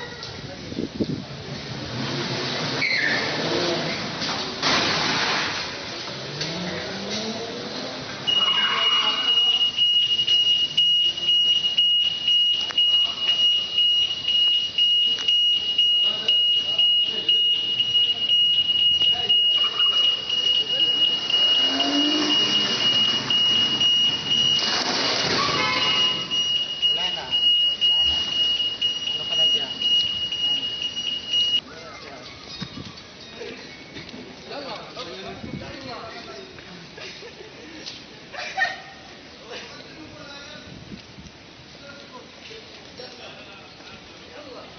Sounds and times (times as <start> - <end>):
Outside, urban or manmade: 0.0 - 44.7
Car: 1.0 - 10.0, 21.2 - 26.4
Speech: 15.8 - 21.8, 29.0 - 30.8.